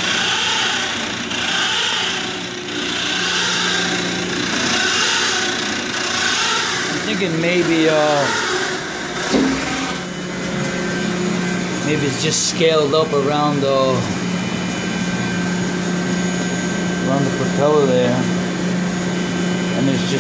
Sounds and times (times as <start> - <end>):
Power tool: 0.0 - 20.2
Speech: 7.0 - 8.4, 11.8 - 14.1, 17.0 - 18.3, 19.8 - 20.2.